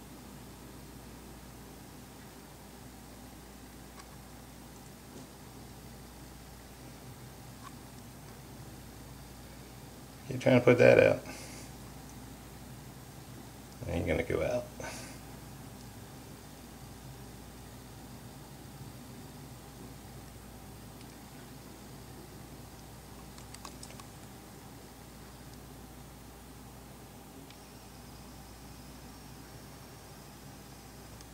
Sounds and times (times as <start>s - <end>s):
Speech: 10.2s - 11.4s, 13.8s - 15.0s.